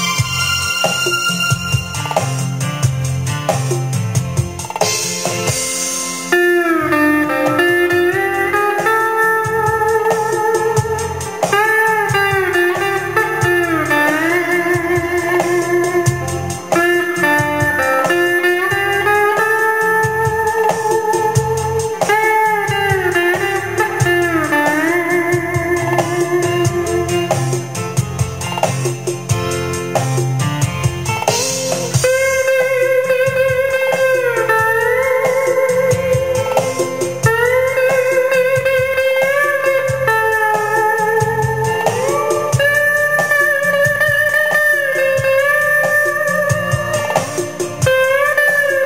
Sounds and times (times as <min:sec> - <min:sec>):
Electric guitar: 0:00.0 - 0:48.8.